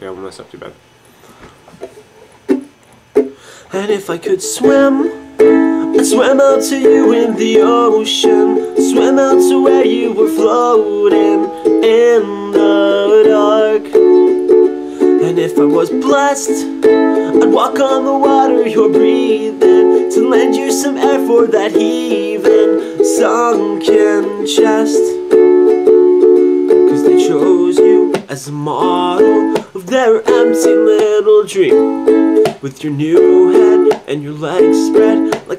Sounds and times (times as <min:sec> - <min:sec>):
Music: 0:02.5 - 0:35.5.